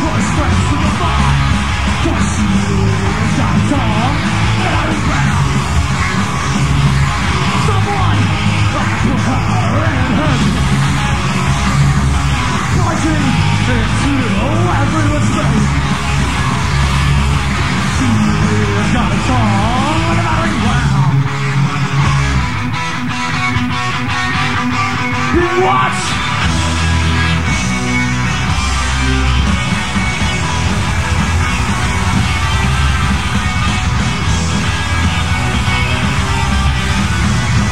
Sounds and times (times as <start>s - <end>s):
Rock and roll: 0.0s - 37.7s.